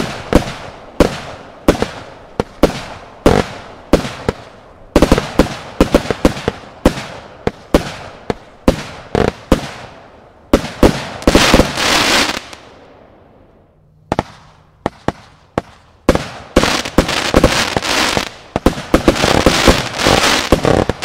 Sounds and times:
Firecracker: 0:00.0 - 0:21.0.

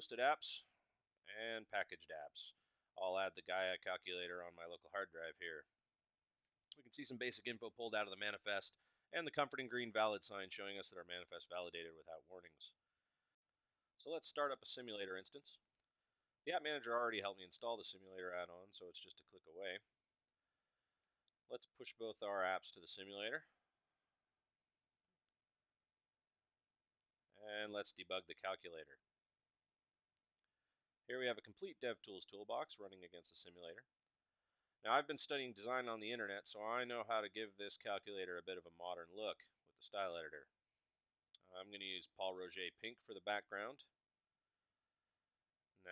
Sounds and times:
Speech: 0:00.0 - 0:00.7, 0:01.3 - 0:05.7, 0:06.8 - 0:12.8, 0:14.0 - 0:15.6, 0:16.5 - 0:19.9, 0:21.5 - 0:23.5, 0:27.4 - 0:29.0, 0:31.1 - 0:33.9, 0:34.8 - 0:40.5, 0:41.4 - 0:43.9.

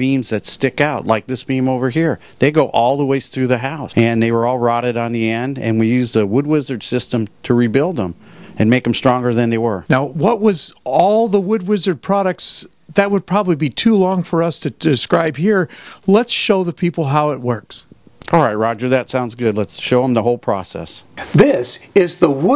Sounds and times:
Speech: 0:00.0 - 0:22.5.

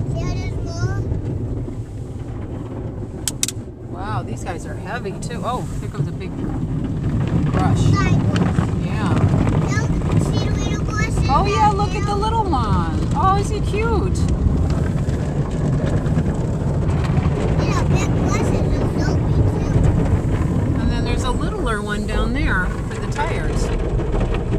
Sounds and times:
Speech: 0:07.5 - 0:14.3, 0:17.6 - 0:19.8, 0:20.8 - 0:23.7.

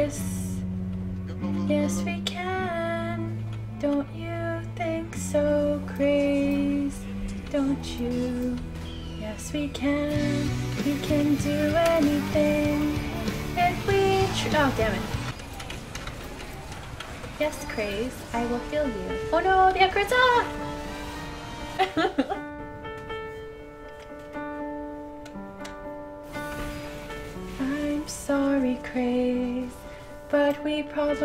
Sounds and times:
Music: 0:00.0 - 0:15.4, 0:17.3 - 0:31.2
Speech: 0:01.4 - 0:02.4, 0:17.4 - 0:20.5
Female singing: 0:01.6 - 0:15.3, 0:17.5 - 0:20.6, 0:27.5 - 0:31.2.

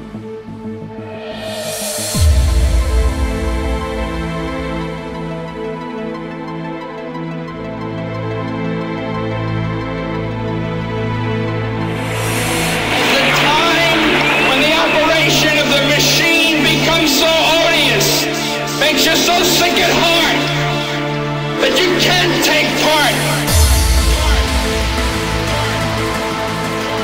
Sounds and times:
Speech: 0:12.9 - 0:21.0, 0:21.6 - 0:26.0.

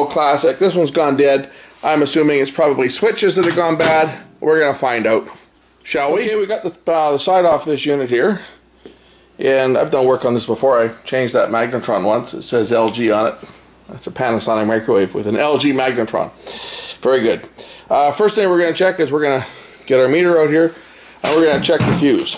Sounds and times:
Speech: 0:00.0 - 0:08.6, 0:09.4 - 0:16.4, 0:17.0 - 0:22.3.

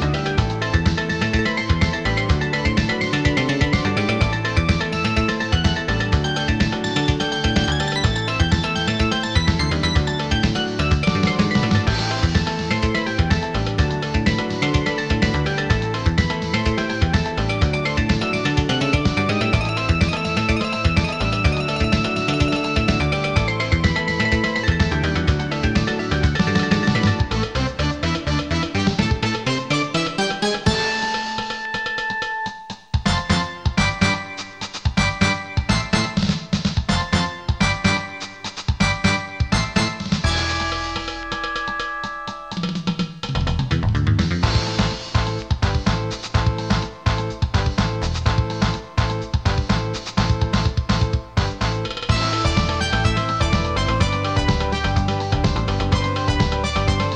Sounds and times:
Video game music: 0:00.0 - 0:57.1.

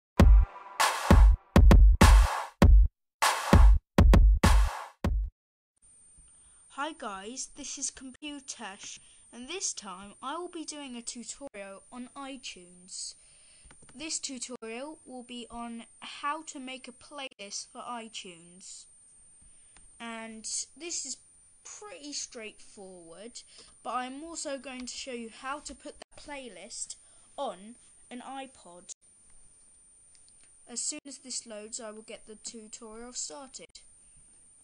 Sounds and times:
Music: 0:00.2 - 0:05.3
Speech: 0:06.7 - 0:13.2, 0:14.0 - 0:18.9, 0:20.0 - 0:29.0, 0:30.7 - 0:33.8.

